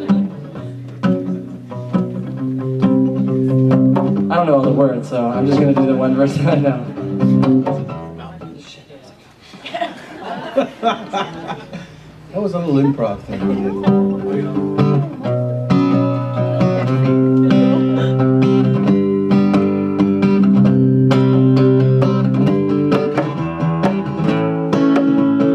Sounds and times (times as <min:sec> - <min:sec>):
Strum: 0:00.0 - 0:08.5, 0:12.8 - 0:25.5
Speech: 0:12.3 - 0:15.3.